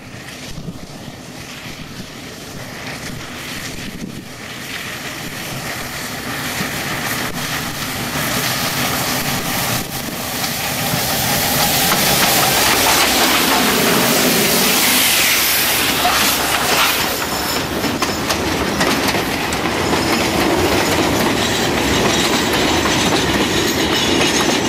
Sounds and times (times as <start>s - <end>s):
Railroad car, train wagon: 0.0s - 24.6s
Train: 0.0s - 24.6s
Clickety-clack: 2.8s - 24.6s.